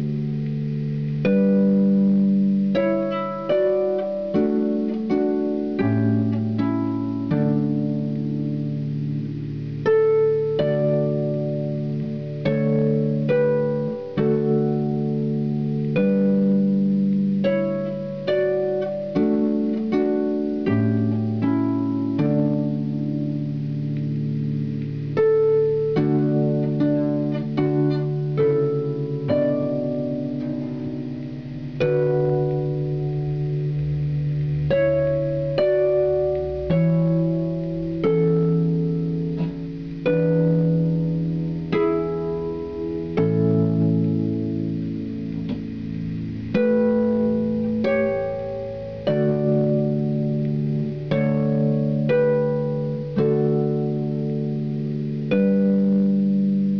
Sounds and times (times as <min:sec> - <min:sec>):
Harp: 0:00.0 - 0:56.7
Pizzicato: 0:00.0 - 0:56.7.